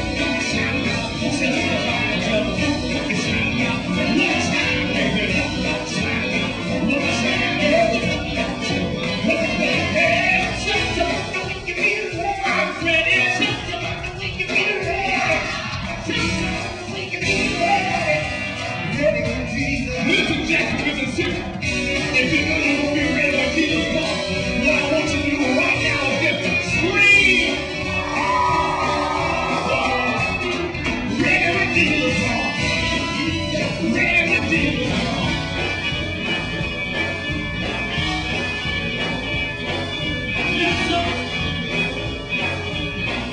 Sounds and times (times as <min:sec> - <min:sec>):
Singing: 0:00.0 - 0:35.7
Rock and roll: 0:00.0 - 0:43.3.